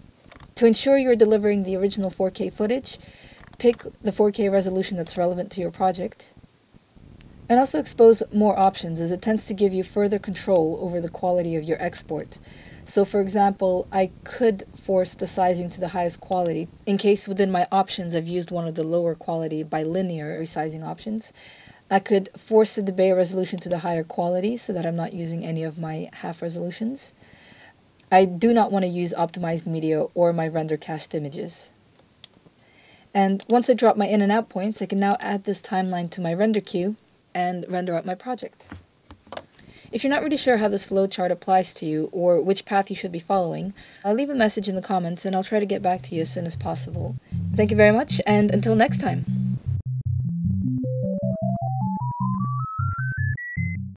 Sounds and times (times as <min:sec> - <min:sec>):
Speech: 0:00.6 - 0:03.0, 0:03.6 - 0:06.4, 0:07.5 - 0:27.2, 0:28.1 - 0:31.8, 0:33.2 - 0:38.7, 0:40.0 - 0:49.3
Music: 0:45.9 - 0:53.9.